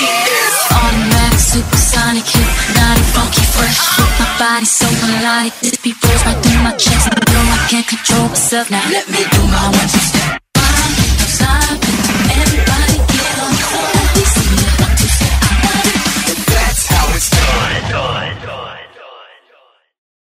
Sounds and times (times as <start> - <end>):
Pop music: 0.0 - 19.4.